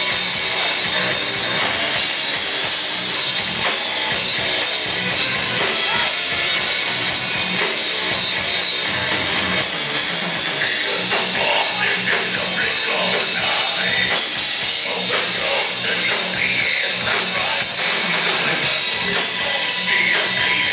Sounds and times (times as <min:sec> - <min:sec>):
Heavy metal: 0:00.0 - 0:20.7.